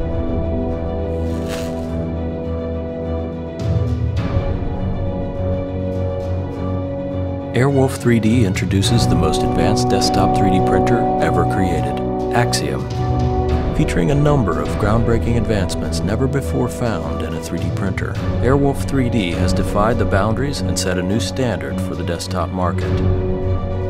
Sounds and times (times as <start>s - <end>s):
Music: 0.0s - 23.8s
Speech: 7.5s - 12.9s, 13.8s - 23.0s.